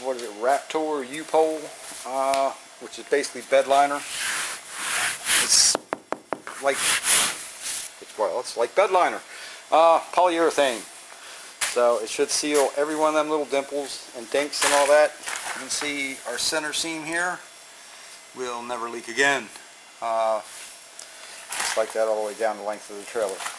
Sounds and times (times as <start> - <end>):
Speech: 0.0 - 4.0, 6.6 - 6.8, 8.0 - 10.9, 11.7 - 17.4, 18.4 - 20.5, 21.7 - 23.5.